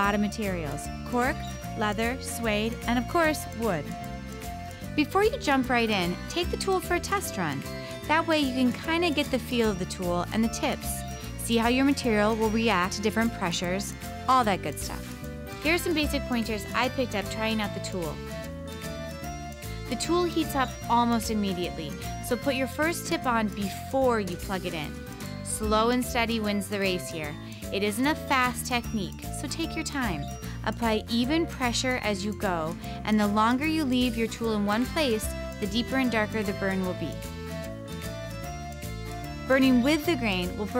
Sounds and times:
Speech: 0.0s - 3.9s, 5.0s - 18.2s, 19.9s - 24.9s, 25.5s - 37.2s, 39.5s - 40.7s
Music: 0.0s - 40.7s.

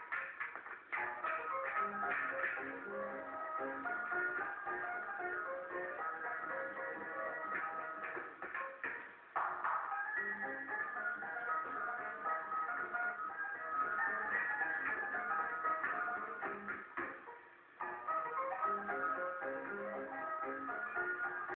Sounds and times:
Funny music: 0.0s - 21.5s.

